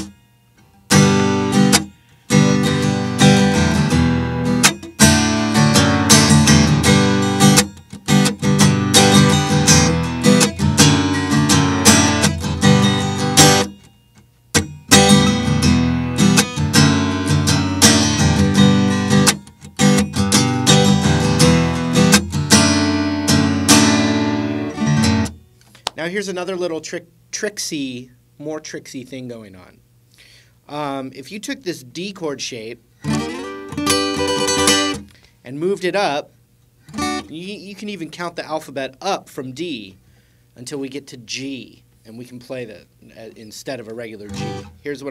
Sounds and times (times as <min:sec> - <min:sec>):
Strum: 0:00.0 - 0:26.1, 0:33.0 - 0:35.8, 0:36.9 - 0:38.2, 0:43.4 - 0:45.1
Acoustic guitar: 0:00.0 - 0:26.9, 0:32.3 - 0:36.2, 0:36.8 - 0:41.6, 0:42.3 - 0:45.1
Speech: 0:26.0 - 0:29.8, 0:30.7 - 0:32.8, 0:35.4 - 0:36.3, 0:37.2 - 0:40.0, 0:40.6 - 0:45.1.